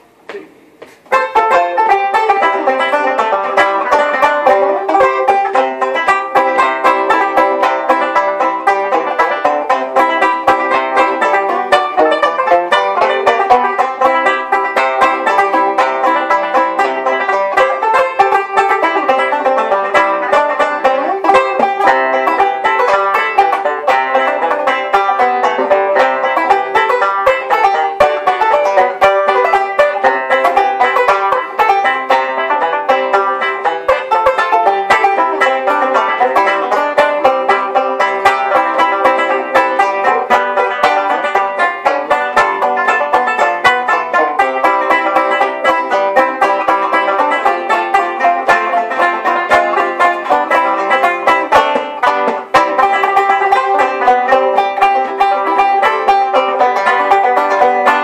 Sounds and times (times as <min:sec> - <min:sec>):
Banjo: 0:01.0 - 0:58.0.